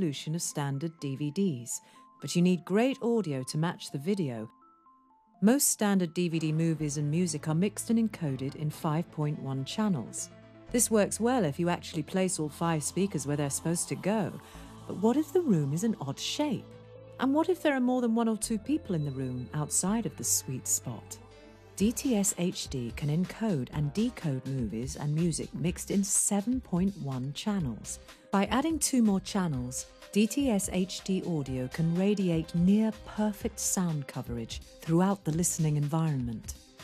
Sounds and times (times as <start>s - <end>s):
Speech: 0.0s - 4.5s, 5.4s - 21.2s, 21.8s - 36.6s
Music: 0.0s - 36.8s.